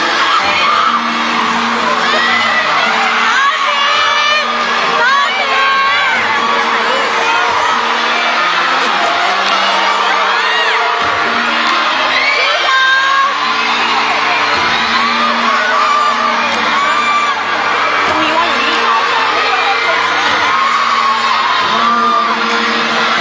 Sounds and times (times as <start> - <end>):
Music: 0.0 - 23.2.